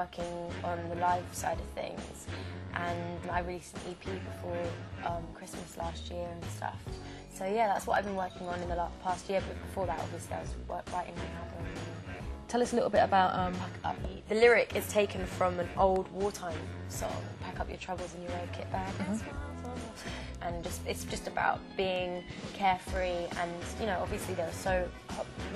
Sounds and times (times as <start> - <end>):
Speech: 0.0 - 2.2, 2.8 - 11.7, 12.5 - 19.3, 20.4 - 25.4
Music: 0.0 - 25.5.